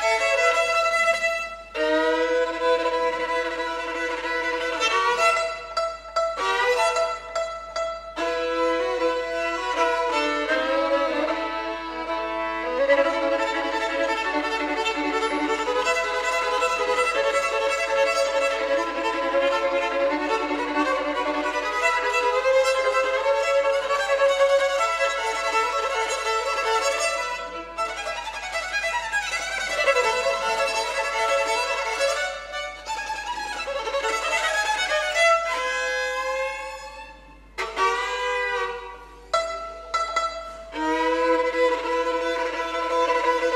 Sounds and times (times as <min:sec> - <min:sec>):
Violin, fiddle: 0:00.0 - 0:43.5.